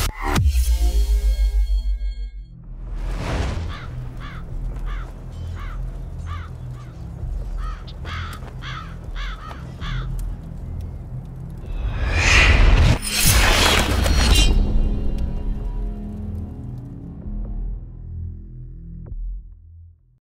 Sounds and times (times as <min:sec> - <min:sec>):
Music: 0:00.0 - 0:20.2.